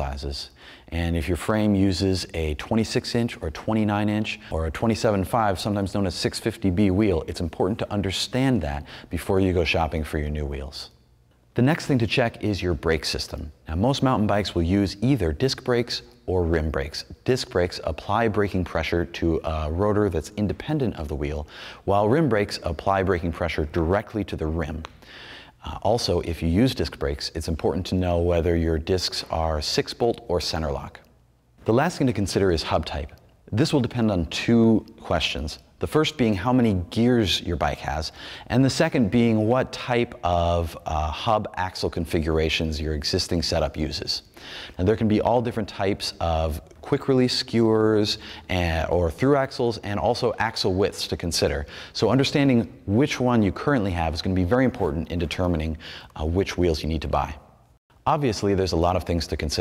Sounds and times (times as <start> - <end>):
Speech: 0.0 - 11.0, 11.6 - 24.9, 25.6 - 59.6.